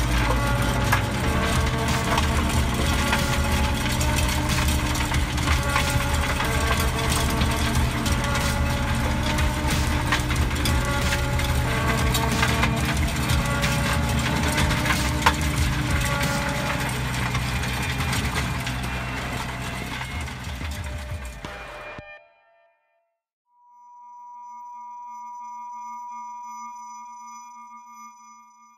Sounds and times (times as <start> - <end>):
Chirp tone: 23.5 - 28.7.